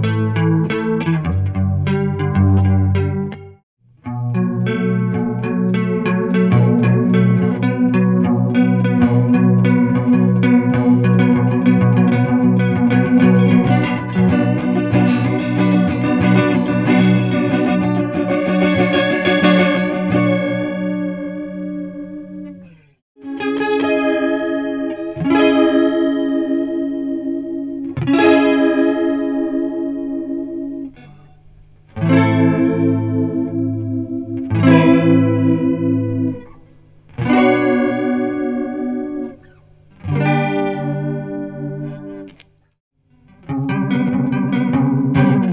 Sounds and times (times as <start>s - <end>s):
Distortion: 0.0s - 45.5s
Music: 0.0s - 45.5s.